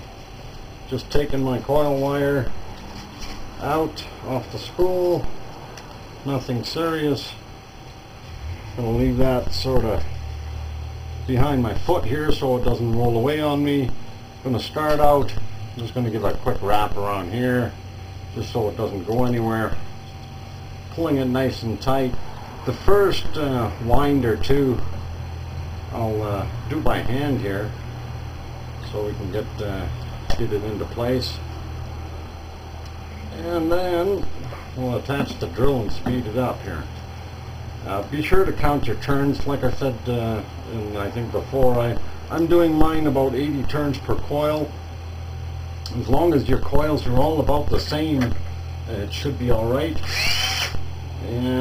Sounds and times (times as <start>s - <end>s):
Speech: 0.9s - 2.5s, 3.6s - 5.3s, 6.2s - 7.4s, 8.8s - 10.1s, 11.3s - 19.8s, 20.9s - 24.9s, 25.9s - 27.8s, 28.8s - 31.5s, 33.3s - 36.9s, 37.8s - 44.8s, 45.9s - 50.1s, 51.2s - 51.6s.